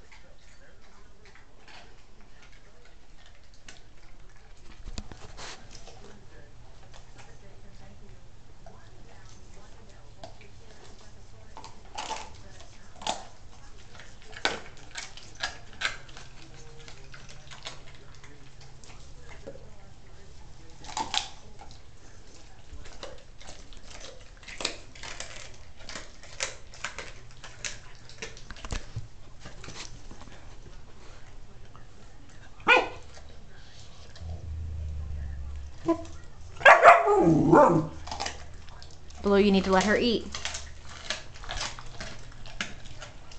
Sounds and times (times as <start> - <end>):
Bow-wow: 32.6 - 33.2, 35.8 - 38.3.